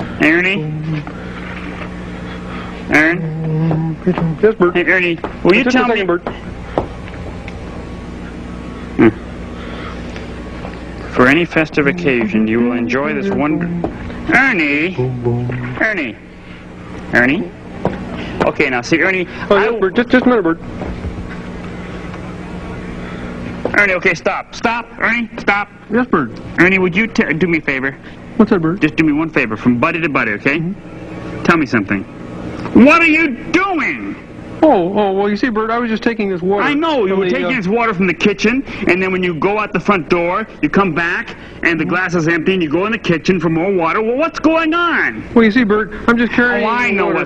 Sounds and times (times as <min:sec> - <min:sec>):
Speech: 0:02.9 - 0:06.4, 0:11.1 - 0:16.2, 0:18.4 - 0:20.6, 0:23.7 - 0:30.8, 0:32.7 - 0:47.2
Music: 0:15.0 - 0:16.1.